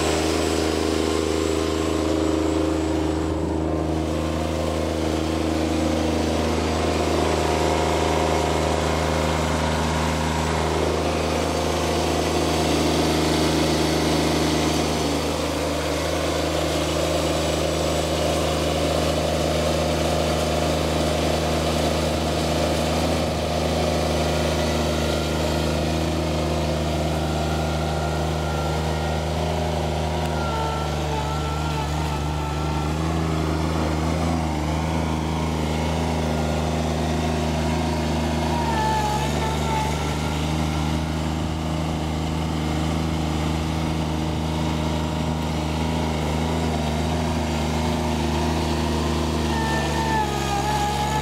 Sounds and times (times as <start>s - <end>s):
Accelerating, revving, vroom: 0.0s - 51.2s
Medium engine (mid frequency): 0.0s - 51.2s
Vehicle: 0.0s - 51.2s.